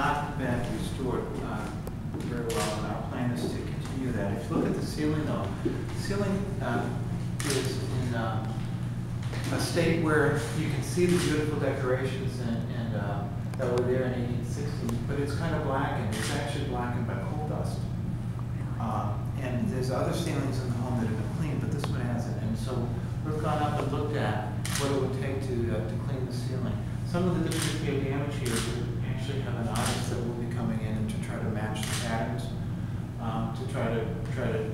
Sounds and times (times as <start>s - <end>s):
Speech: 0.0s - 8.7s, 9.4s - 17.9s, 18.6s - 32.6s, 33.2s - 34.7s.